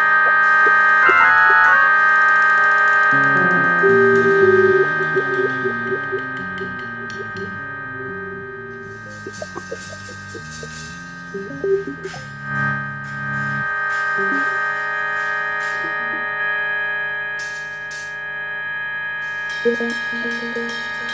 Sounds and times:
Piano: 0:00.0 - 0:12.6.

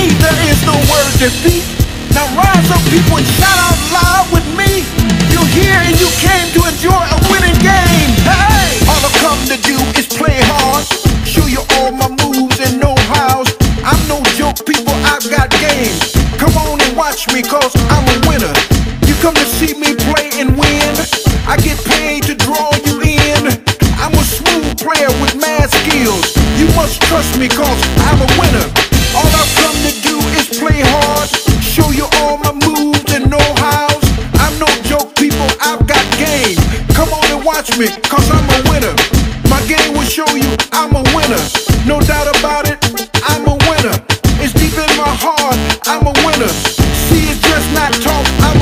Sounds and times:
Music: 0:00.0 - 0:48.6.

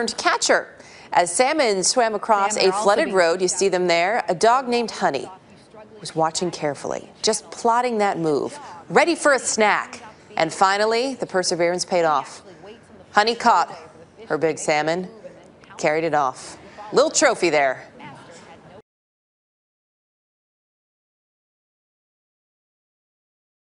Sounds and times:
Speech: 0:00.0 - 0:18.8.

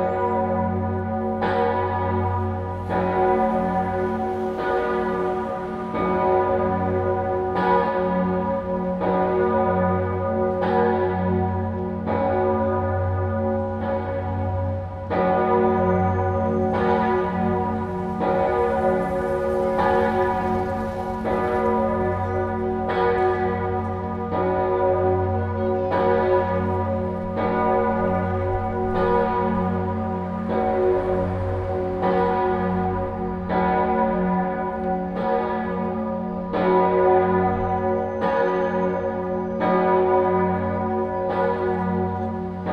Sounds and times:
Church bell: 0:00.0 - 0:42.7.

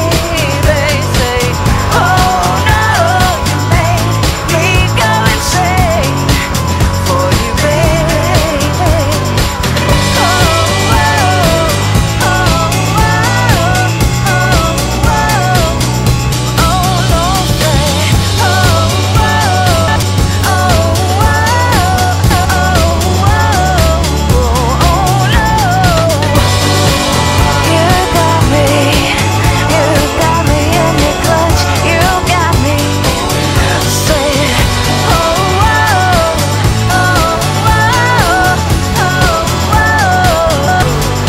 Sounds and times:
Independent music: 0:00.0 - 0:41.2.

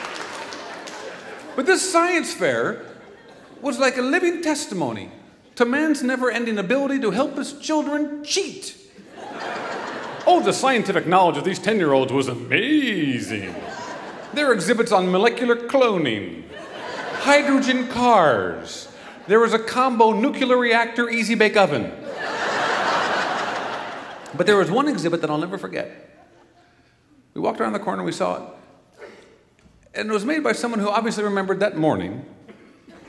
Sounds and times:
Speech: 0:01.6 - 0:02.9, 0:03.6 - 0:08.9, 0:10.2 - 0:16.5, 0:17.2 - 0:22.0, 0:24.3 - 0:26.0, 0:27.4 - 0:28.6, 0:29.9 - 0:32.3.

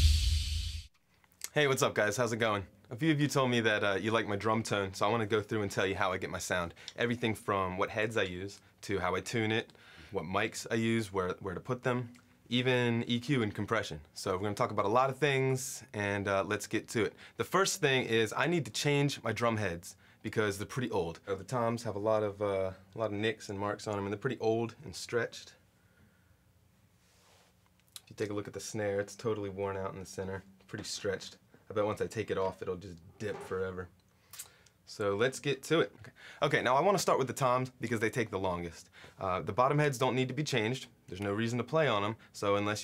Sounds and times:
Speech: 0:01.4 - 0:25.6, 0:28.0 - 0:34.0, 0:34.9 - 0:42.8.

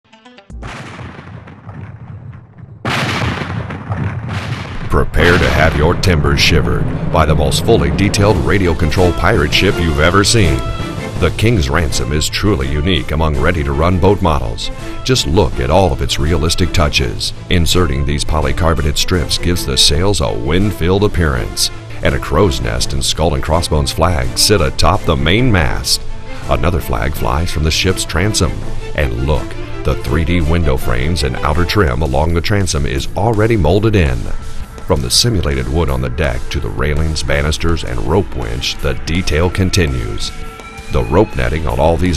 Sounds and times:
Music: 0:00.0 - 0:00.7, 0:04.9 - 0:42.1
Gunshot, gunfire: 0:00.6 - 0:05.9
Speech: 0:04.9 - 0:42.1.

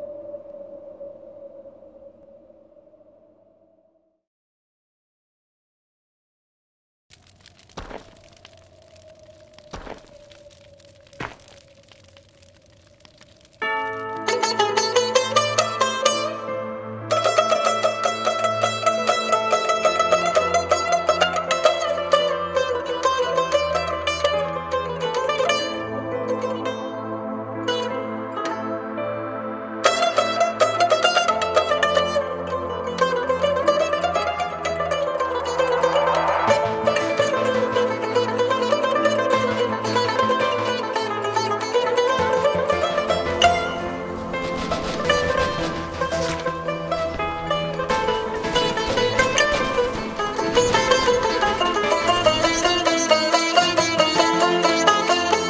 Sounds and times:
Traditional music: 0:13.3 - 0:55.4.

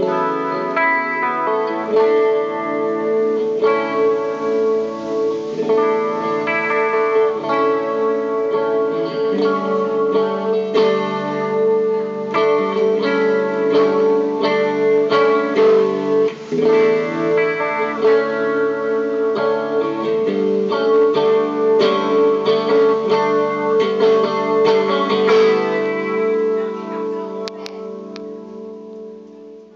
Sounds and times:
Musical instrument: 0:00.0 - 0:29.4.

